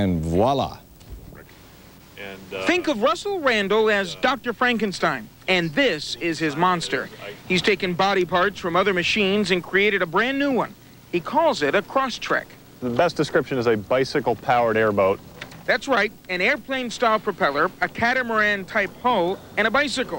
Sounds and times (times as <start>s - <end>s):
Speech: 2.2s - 20.1s.